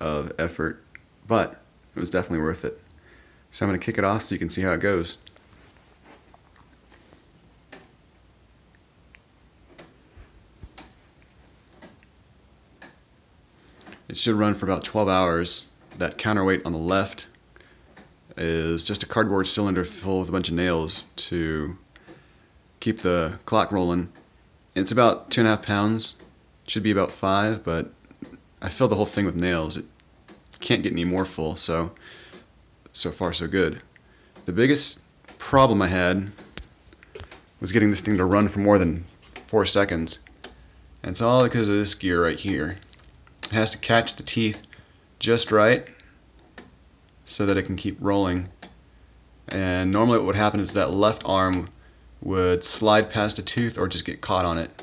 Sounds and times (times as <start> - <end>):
Speech: 0.0 - 2.9, 3.5 - 5.3, 14.0 - 17.4, 18.3 - 21.8, 22.8 - 24.2, 24.8 - 29.9, 30.6 - 32.0, 32.9 - 36.4, 37.6 - 40.3, 41.0 - 46.0, 47.2 - 48.6, 49.5 - 54.8.